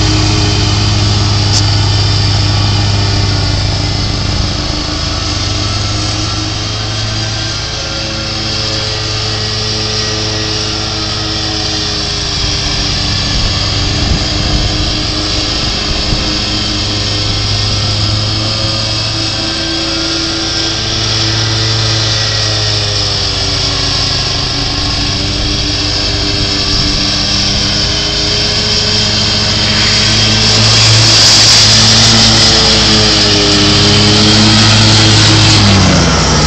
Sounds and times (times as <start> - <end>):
Lawn mower: 0.0 - 36.4
Vehicle: 0.0 - 36.4.